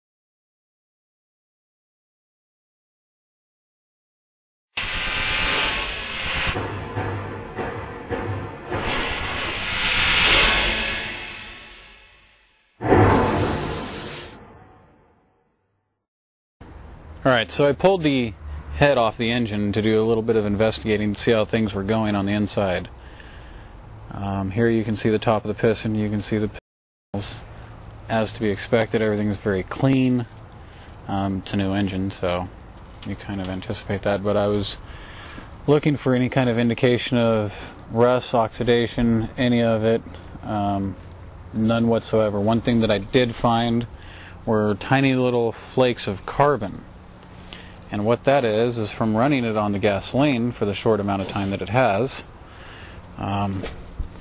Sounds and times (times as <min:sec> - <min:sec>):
Speech: 0:17.2 - 0:22.9, 0:24.1 - 0:26.6, 0:27.2 - 0:27.5, 0:28.1 - 0:30.3, 0:31.1 - 0:34.8, 0:35.7 - 0:41.0, 0:41.6 - 0:43.9, 0:44.5 - 0:46.9, 0:47.9 - 0:52.3, 0:53.2 - 0:53.7.